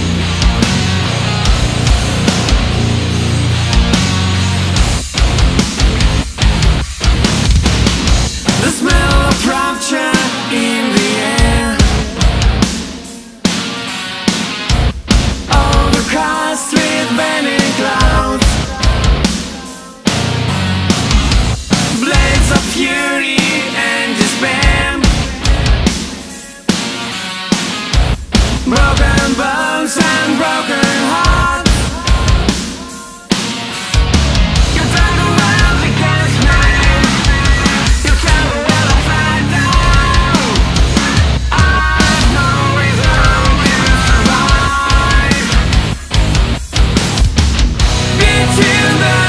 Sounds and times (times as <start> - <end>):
Heavy metal: 0.0 - 49.2
Rock and roll: 0.0 - 49.2.